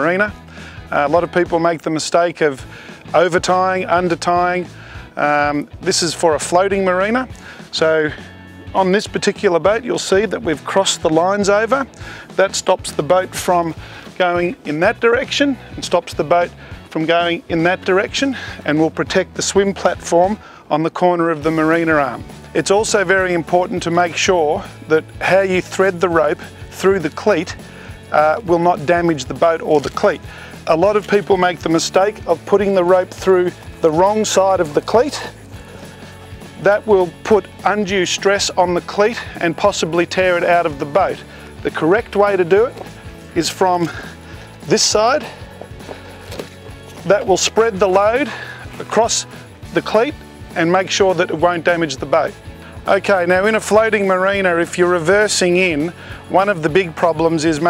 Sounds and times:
Speech: 0:00.0 - 0:35.4, 0:36.6 - 0:42.8, 0:43.4 - 0:45.4, 0:47.0 - 0:57.7
Music: 0:00.0 - 0:57.7.

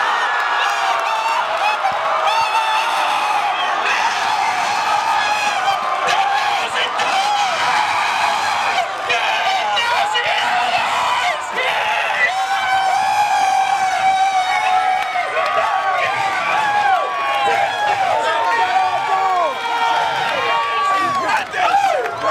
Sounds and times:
Speech: 0:05.2 - 0:07.6, 0:08.6 - 0:12.9, 0:13.8 - 0:19.6, 0:20.2 - 0:22.3.

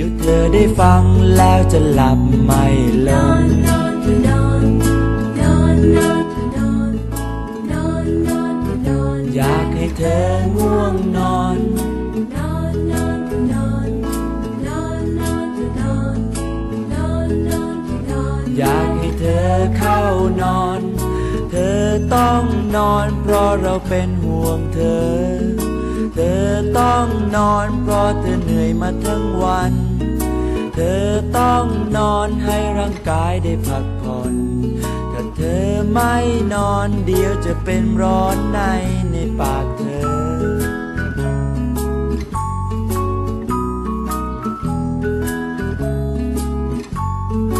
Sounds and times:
Music: 0:00.0 - 0:47.5.

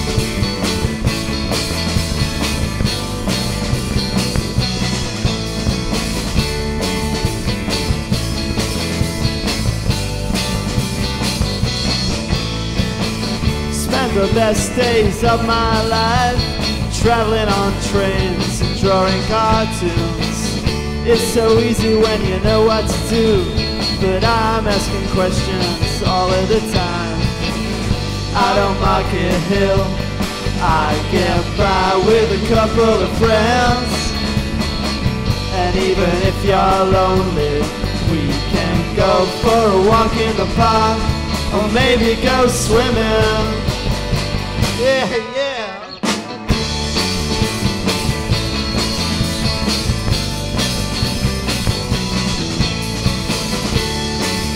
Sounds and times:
Music: 0:00.0 - 0:54.5.

